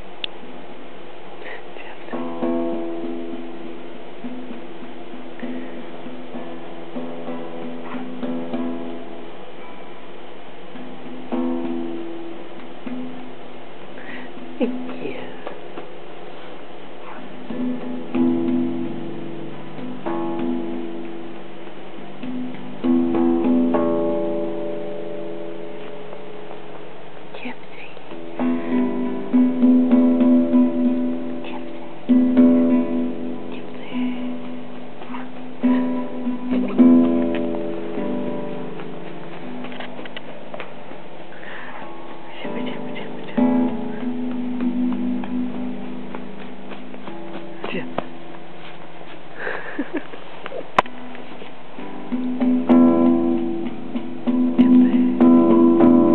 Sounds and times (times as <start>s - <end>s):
Acoustic guitar: 1.4s - 56.1s.